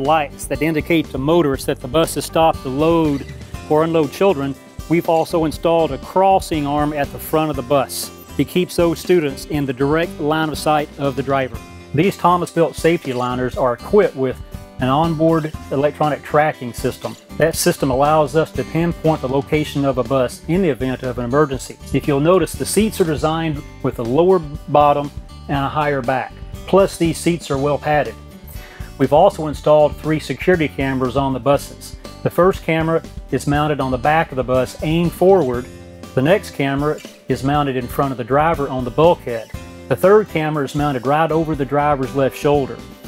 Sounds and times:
Speech: 0.0s - 28.2s, 29.0s - 42.9s
Music: 0.0s - 43.0s.

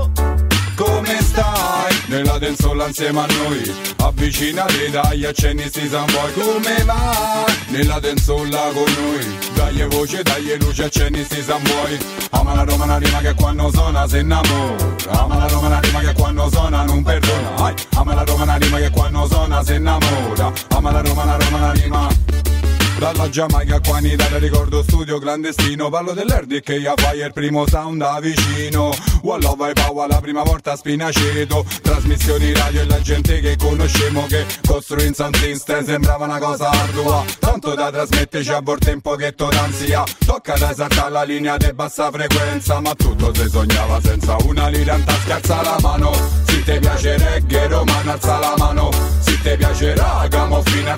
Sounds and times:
Music: 0.0s - 50.9s.

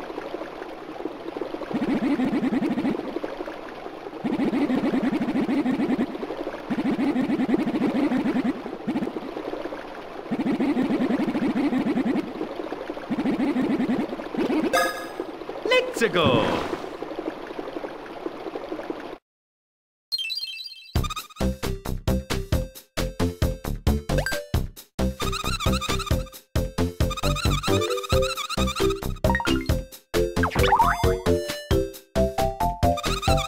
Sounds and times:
Speech: 15.7s - 16.7s.

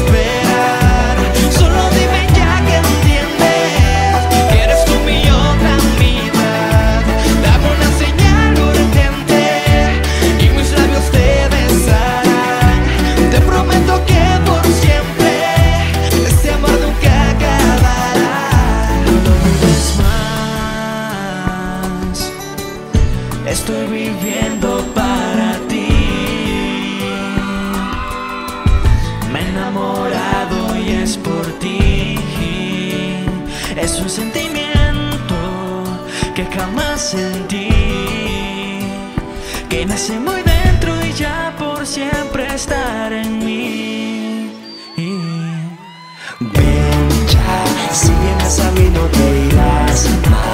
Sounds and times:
Singing: 0.0s - 22.8s, 23.4s - 50.5s
Music: 0.0s - 50.5s
Inside, large room or hall: 25.9s - 50.5s.

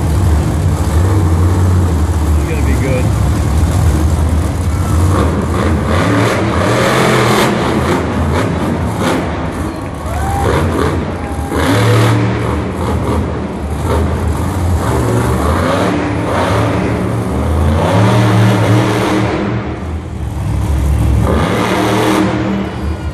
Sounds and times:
Vehicle: 0.0s - 23.1s.

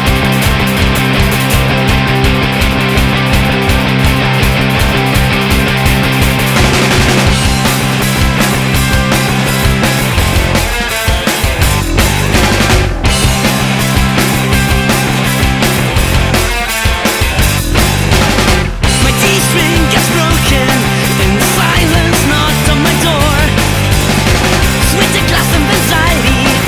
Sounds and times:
Music: 0.0s - 26.6s.

